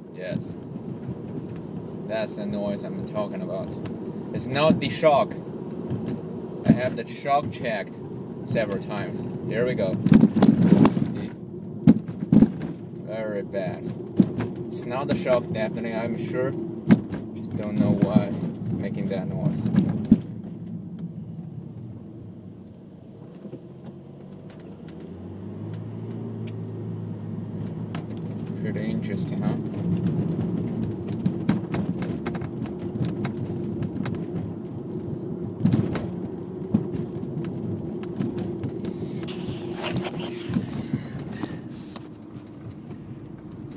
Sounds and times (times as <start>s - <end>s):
Speech: 0.2s - 0.6s, 2.1s - 5.4s, 6.7s - 10.0s, 10.7s - 11.4s, 13.1s - 13.9s, 14.7s - 16.6s, 17.4s - 19.7s, 28.6s - 29.6s.